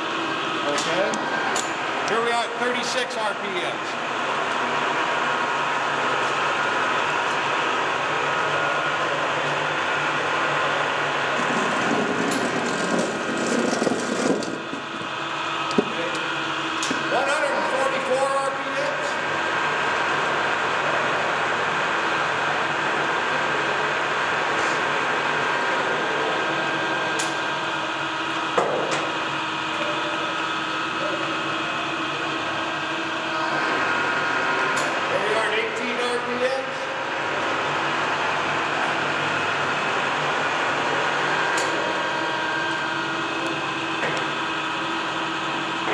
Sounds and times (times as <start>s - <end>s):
Heavy engine (low frequency): 0.0s - 45.9s.